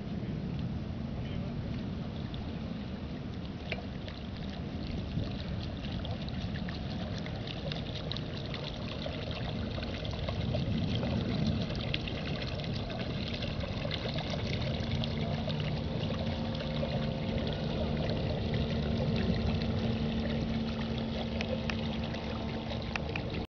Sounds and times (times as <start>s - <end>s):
Boat, Water vehicle: 0.0s - 23.4s
Waves, surf: 0.0s - 23.4s.